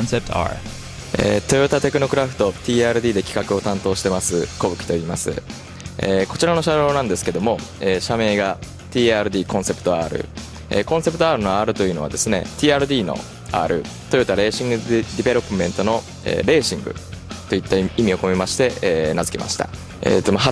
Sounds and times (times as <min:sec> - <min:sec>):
Speech: 0:00.0 - 0:05.4, 0:06.0 - 0:20.5
Techno: 0:00.0 - 0:20.5.